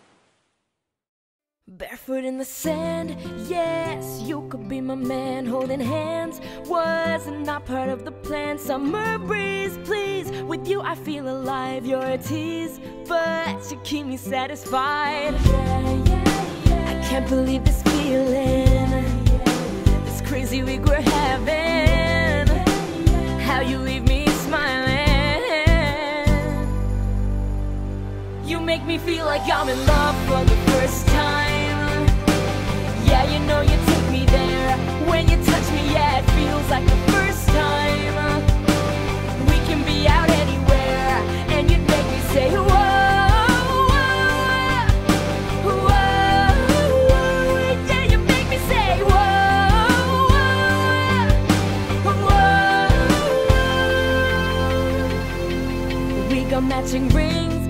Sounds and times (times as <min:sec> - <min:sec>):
Happy music: 0:02.2 - 0:57.7.